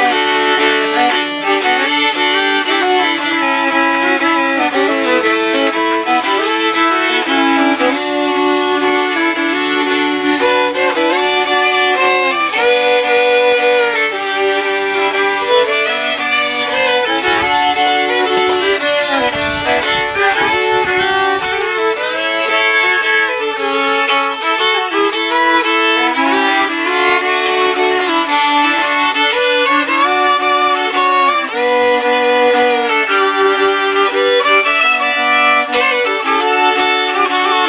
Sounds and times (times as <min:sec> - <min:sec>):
Violin, fiddle: 0:00.0 - 0:37.6.